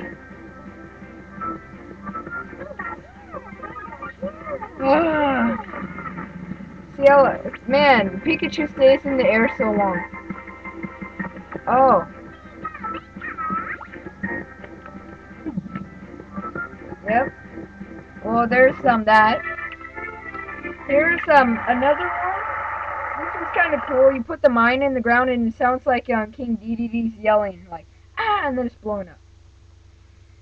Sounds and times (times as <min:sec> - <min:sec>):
Music: 0:00.0 - 0:24.2
Speech: 0:02.7 - 0:05.6, 0:07.0 - 0:10.0, 0:11.7 - 0:12.1, 0:17.1 - 0:17.3, 0:18.2 - 0:19.4, 0:20.9 - 0:22.4, 0:23.2 - 0:29.2.